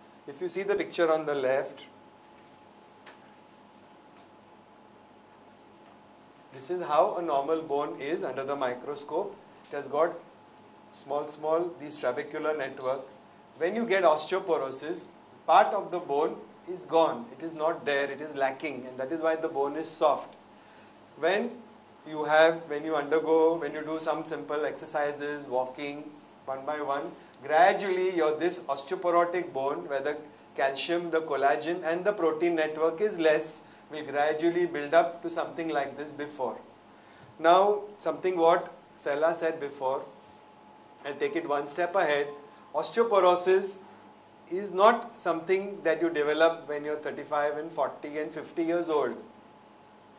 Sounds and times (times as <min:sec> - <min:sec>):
Speech: 0:00.3 - 0:02.0, 0:06.6 - 0:10.2, 0:11.0 - 0:20.4, 0:21.2 - 0:36.7, 0:37.4 - 0:40.2, 0:41.0 - 0:43.8, 0:44.5 - 0:49.3.